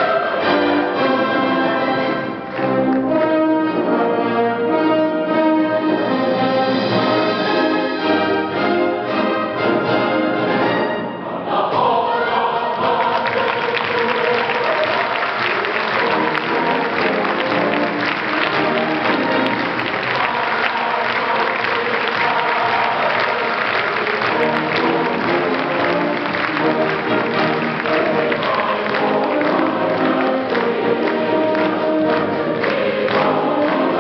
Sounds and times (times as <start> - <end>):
Choir: 0.0 - 2.8, 3.8 - 34.0
Classical music: 0.0 - 34.0
Orchestra: 0.0 - 34.0.